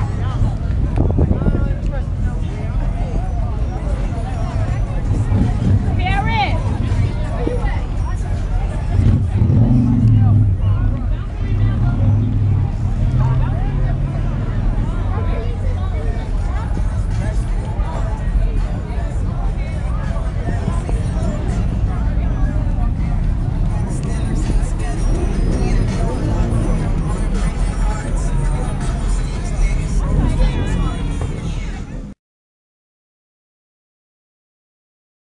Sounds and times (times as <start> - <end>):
Music: 0.0 - 32.2
Speech: 0.0 - 32.2.